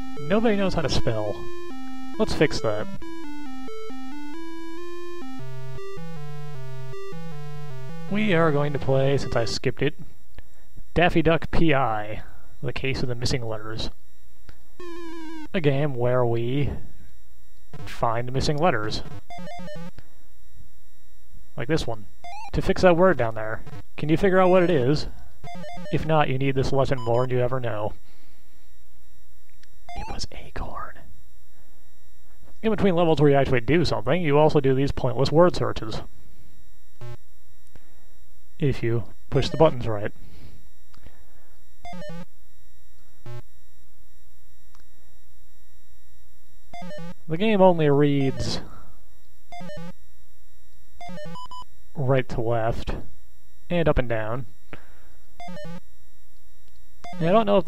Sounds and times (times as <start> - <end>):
Speech: 0.2 - 1.4, 2.2 - 2.9, 8.1 - 10.0, 11.0 - 14.0, 15.6 - 16.8, 17.9 - 19.1, 21.6 - 22.0, 22.6 - 25.1, 25.9 - 28.0, 30.0 - 31.1, 32.6 - 36.1, 38.6 - 40.2, 47.3 - 48.8, 52.0 - 53.1, 53.7 - 54.5, 57.2 - 57.6.